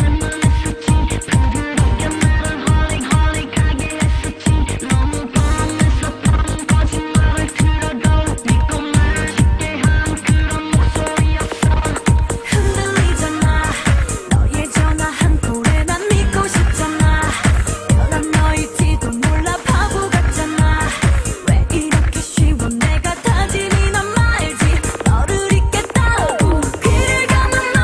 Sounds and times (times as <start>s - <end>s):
Music: 0.0s - 27.8s.